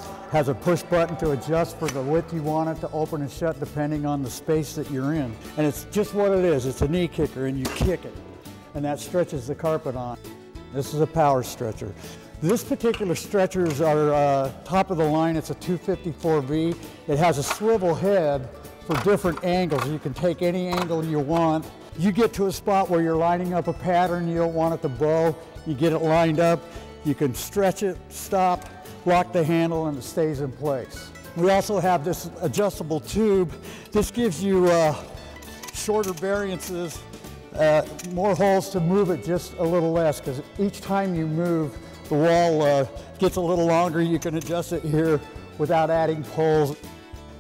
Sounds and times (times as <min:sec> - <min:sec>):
Speech: 0:00.0 - 0:35.1, 0:35.7 - 0:46.8
Music: 0:00.0 - 0:47.4.